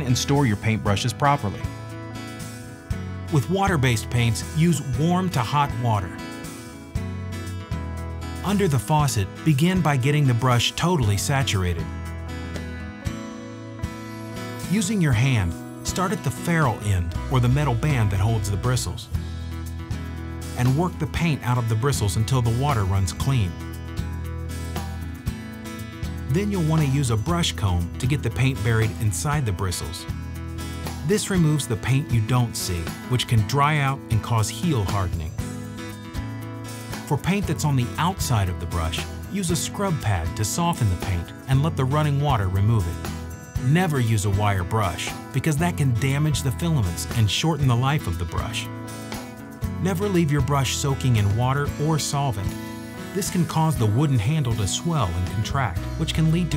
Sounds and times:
Speech: 0.0 - 1.7, 3.3 - 6.2, 8.4 - 11.9, 14.7 - 19.2, 20.6 - 23.6, 26.3 - 30.1, 31.0 - 35.4, 37.1 - 48.7, 49.8 - 56.5
Music: 0.0 - 56.5.

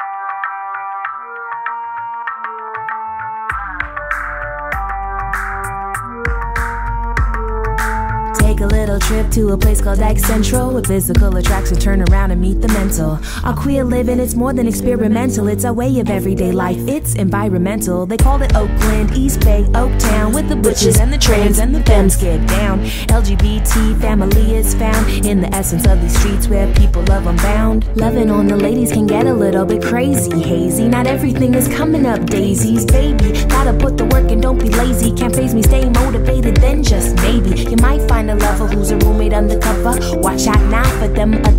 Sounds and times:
Rhythm and blues: 0.0 - 41.5
Tender music: 0.0 - 41.5.

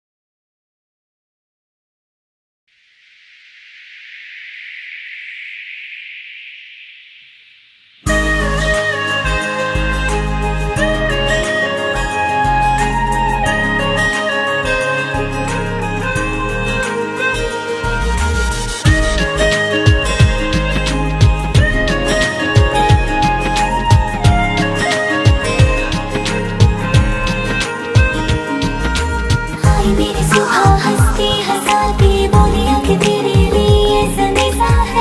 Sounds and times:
Music: 8.0 - 35.0.

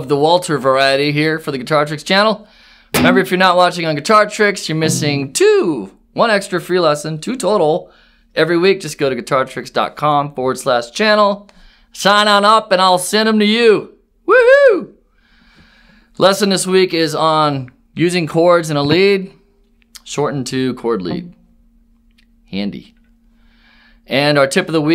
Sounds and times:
Speech: 0.0 - 2.4, 3.0 - 14.0, 16.2 - 19.4, 20.0 - 21.4, 22.5 - 23.0, 24.1 - 24.9.

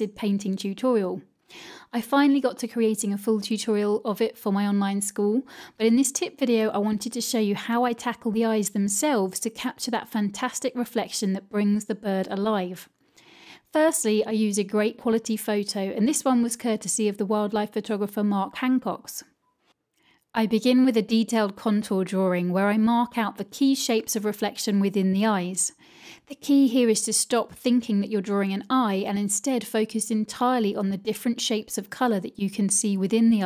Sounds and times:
Speech: 0.0 - 1.2, 1.9 - 12.9, 13.7 - 19.3, 20.4 - 33.4.

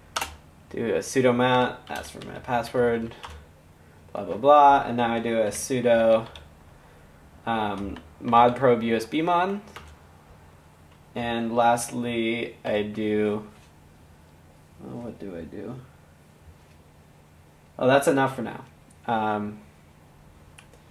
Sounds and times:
Speech: 0.7 - 3.2, 4.1 - 6.4, 7.4 - 9.7, 11.2 - 13.6, 14.8 - 15.9, 17.8 - 19.7.

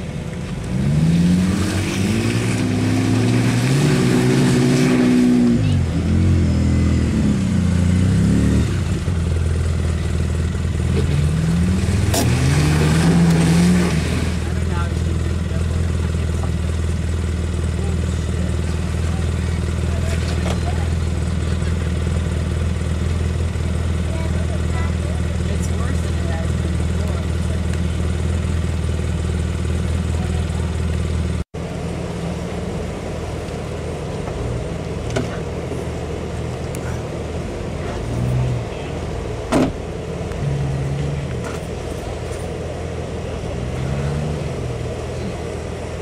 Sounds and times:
Vehicle: 0.0 - 46.0
Accelerating, revving, vroom: 0.6 - 9.1, 10.9 - 14.5, 43.6 - 44.9.

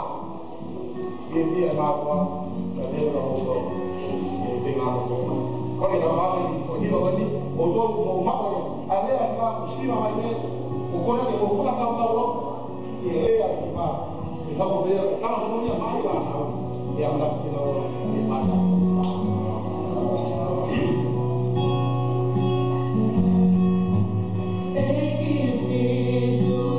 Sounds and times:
Music: 0.0 - 26.7
Speech: 1.3 - 21.2.

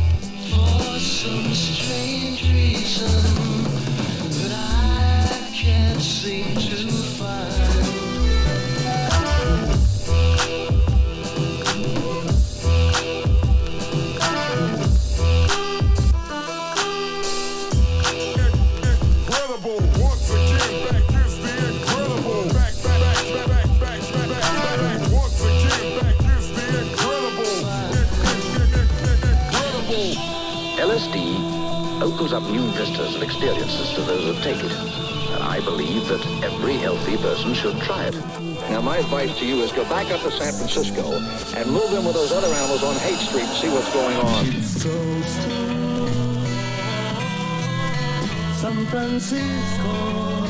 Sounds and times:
Psychedelic rock: 0.0 - 40.2.

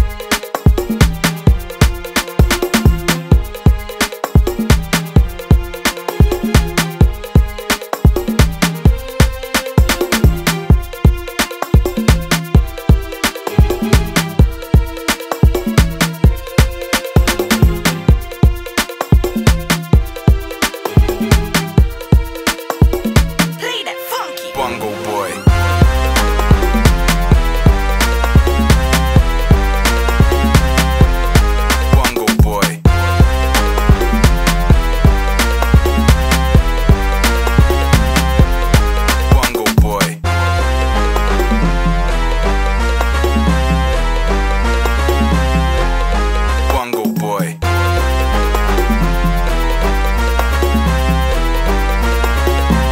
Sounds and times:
Drum: 0.0 - 23.6, 25.5 - 40.2
House music: 0.0 - 52.9.

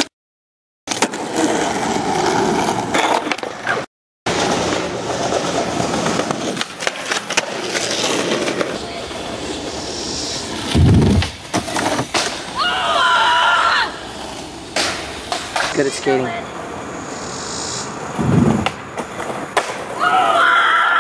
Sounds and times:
Outside, urban or manmade: 0.8 - 21.0
Speech: 15.7 - 16.5.

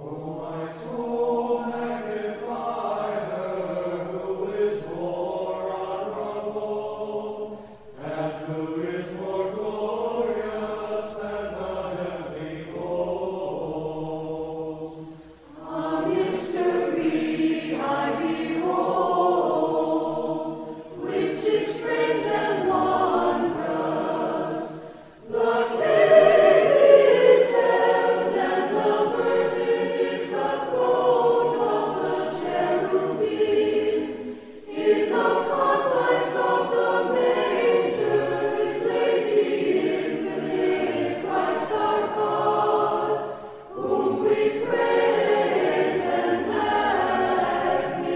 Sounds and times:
Mantra: 0.0 - 48.1.

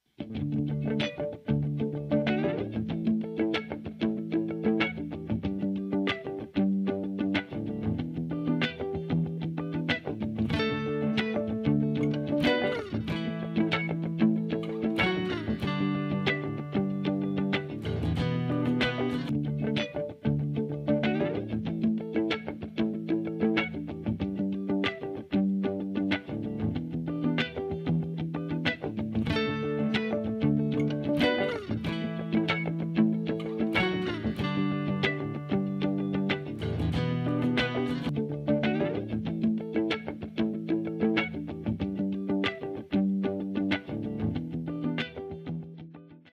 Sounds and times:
Music: 0.0 - 46.3.

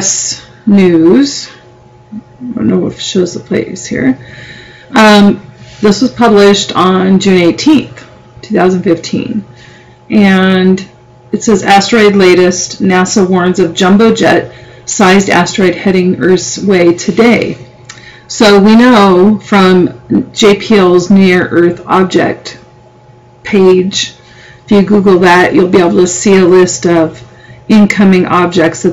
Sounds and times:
Speech: 0.0 - 1.6, 2.2 - 4.2, 4.9 - 9.5, 10.1 - 17.6, 18.3 - 22.6, 23.5 - 28.9.

